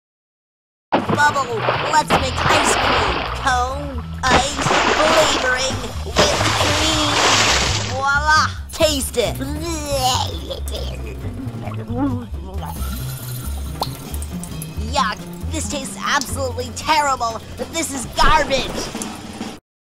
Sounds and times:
Music: 0:01.0 - 0:19.6
Speech: 0:01.1 - 0:12.8, 0:14.8 - 0:19.0.

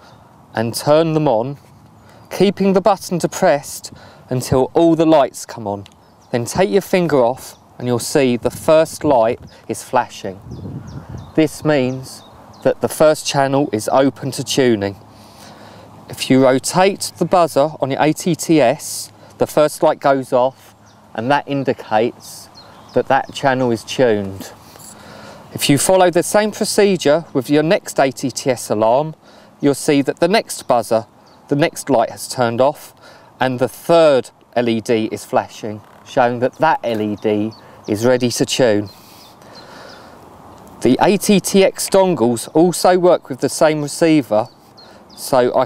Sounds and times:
Speech: 0:00.6 - 0:01.6, 0:02.3 - 0:10.4, 0:11.4 - 0:15.0, 0:16.1 - 0:24.6, 0:25.5 - 0:38.9, 0:40.8 - 0:44.5, 0:45.2 - 0:45.6.

